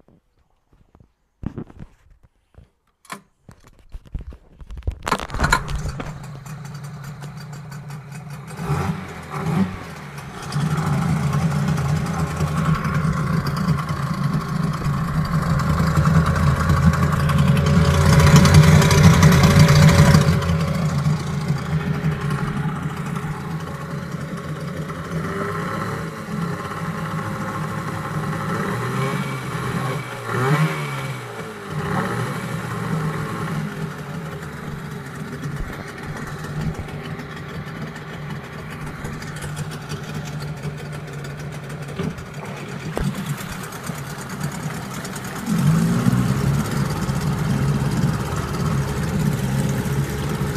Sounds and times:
Medium engine (mid frequency): 0:03.7 - 0:50.5
Idling: 0:05.1 - 0:50.5.

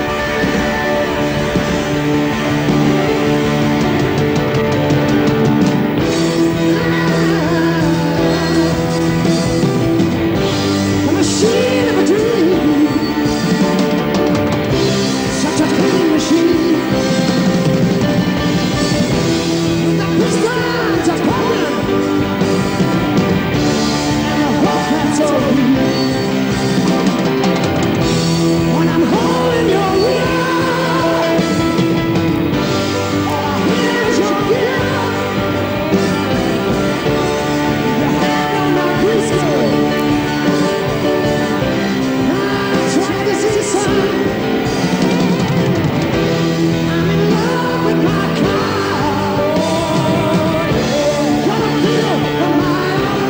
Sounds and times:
Music: 0:00.0 - 0:53.2.

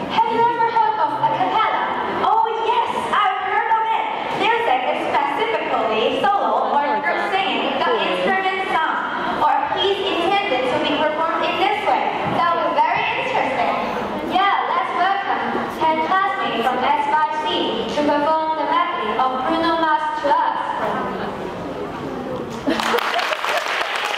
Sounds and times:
Speech: 0:00.1 - 0:22.6.

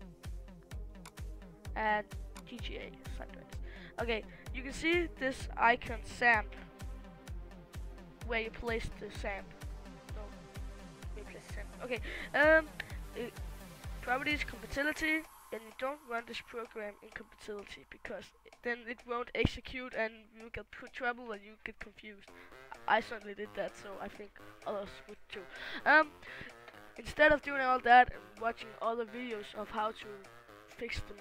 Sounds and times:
Speech: 0:01.8 - 0:03.4, 0:04.0 - 0:06.7, 0:08.2 - 0:09.5, 0:11.2 - 0:13.4, 0:14.0 - 0:26.2, 0:27.0 - 0:31.2.

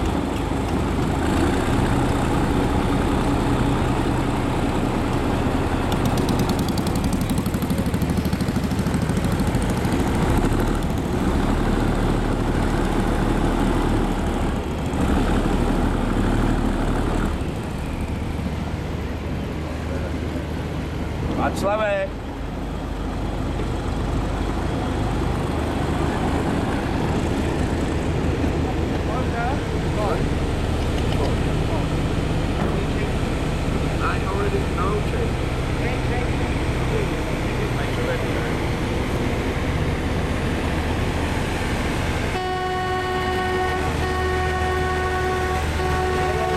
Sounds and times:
Sailboat, sailing ship: 0:00.0 - 0:46.5
Speech: 0:21.4 - 0:22.2, 0:28.9 - 0:30.3, 0:34.0 - 0:38.6.

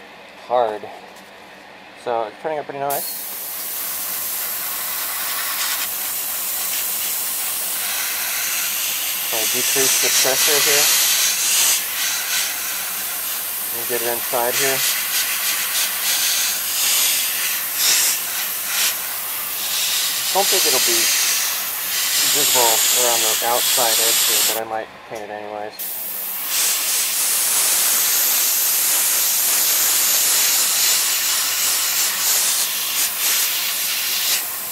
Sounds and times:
Speech: 0:00.5 - 0:01.0, 0:02.0 - 0:03.0, 0:09.3 - 0:10.9, 0:13.7 - 0:14.8, 0:20.3 - 0:21.1, 0:22.2 - 0:25.8
Spray: 0:02.9 - 0:24.6, 0:25.8 - 0:34.7.

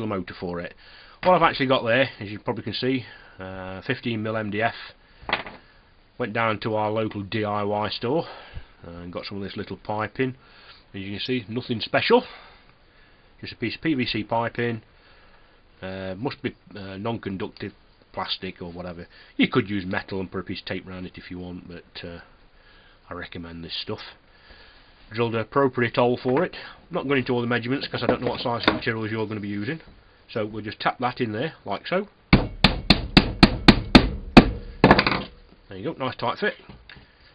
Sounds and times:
Speech: 0:00.0 - 0:05.0, 0:06.2 - 0:10.4, 0:11.0 - 0:12.3, 0:13.4 - 0:14.9, 0:15.8 - 0:22.3, 0:23.1 - 0:24.2, 0:25.1 - 0:32.2, 0:35.7 - 0:36.8.

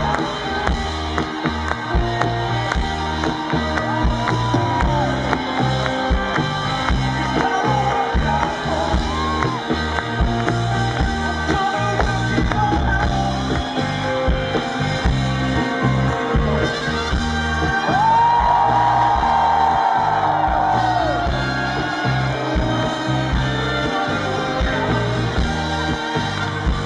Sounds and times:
Music: 0:00.0 - 0:26.8.

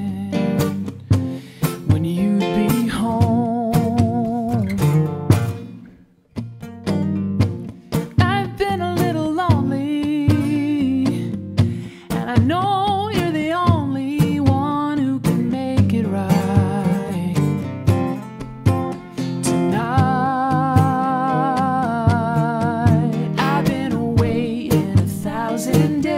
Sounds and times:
Music: 0:00.0 - 0:26.1.

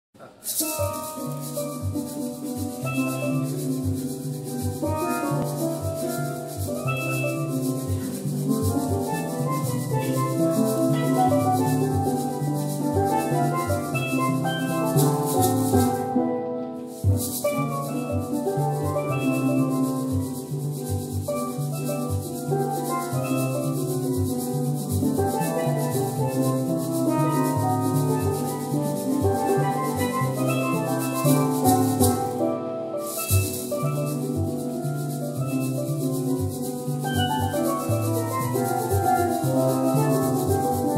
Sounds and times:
Steelpan: 0:00.2 - 0:40.9.

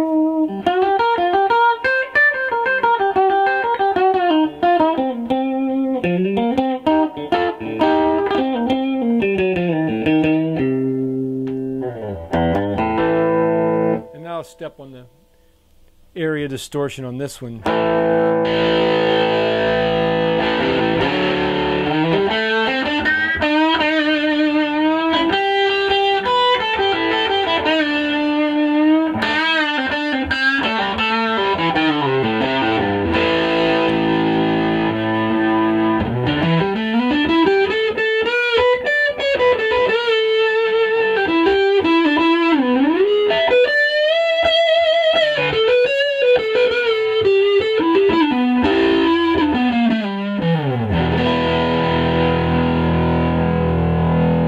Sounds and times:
Electric guitar: 0:00.0 - 0:14.4, 0:17.6 - 0:54.4.

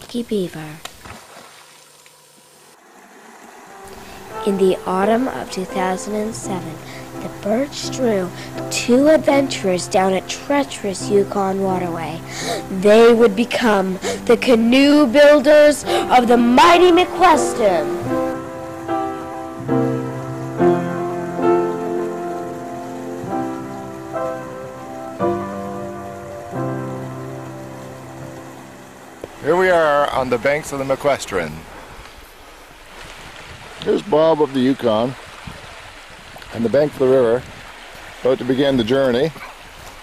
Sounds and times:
Speech: 0:00.0 - 0:00.8, 0:04.4 - 0:17.8, 0:29.4 - 0:31.6, 0:33.8 - 0:35.2, 0:36.6 - 0:37.5, 0:38.2 - 0:39.4
Rowboat, canoe, kayak: 0:00.1 - 0:40.0
Music: 0:03.8 - 0:29.5.

